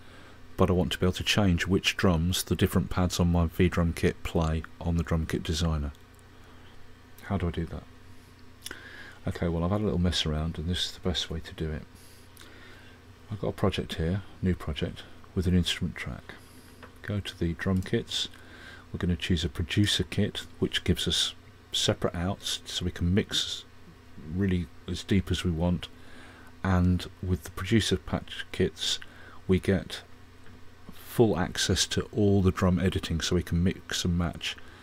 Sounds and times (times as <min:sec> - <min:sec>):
Speech: 0:00.6 - 0:06.0, 0:07.2 - 0:07.9, 0:09.2 - 0:11.9, 0:13.3 - 0:16.4, 0:17.0 - 0:26.0, 0:26.6 - 0:30.1, 0:30.9 - 0:34.6.